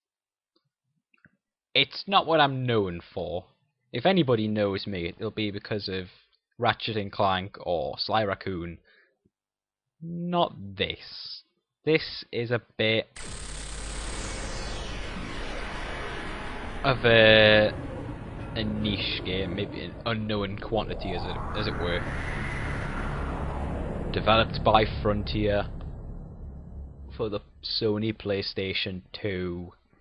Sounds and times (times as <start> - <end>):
Speech: 1.8 - 3.4, 4.0 - 8.8, 10.0 - 13.1, 16.9 - 17.8, 18.6 - 22.1, 24.2 - 25.7, 27.2 - 29.7.